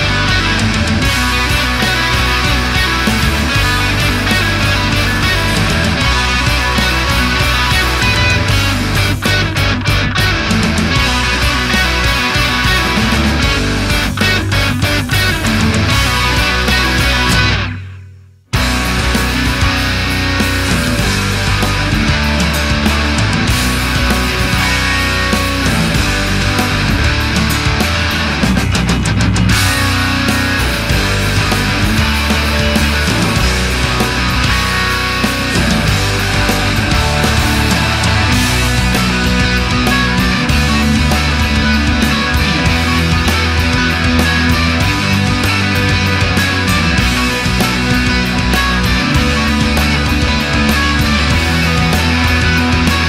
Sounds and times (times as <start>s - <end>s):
Progressive rock: 0.0s - 53.0s.